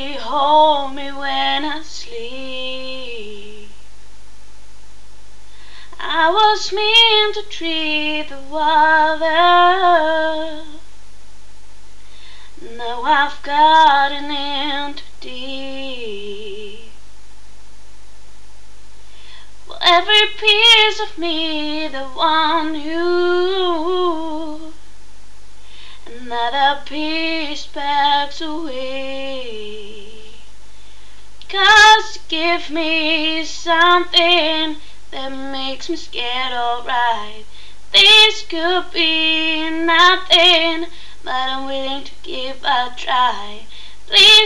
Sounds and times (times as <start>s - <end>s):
Female singing: 0.0s - 3.8s, 5.9s - 10.9s, 12.6s - 17.0s, 19.7s - 24.8s, 26.0s - 30.4s, 31.4s - 44.4s.